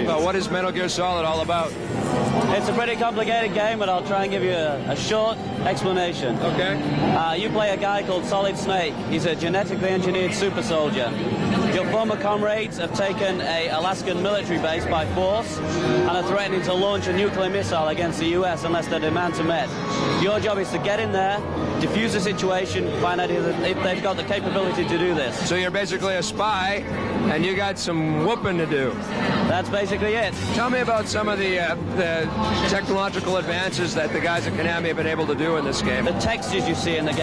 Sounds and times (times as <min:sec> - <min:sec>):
Music: 0:00.0 - 0:37.2.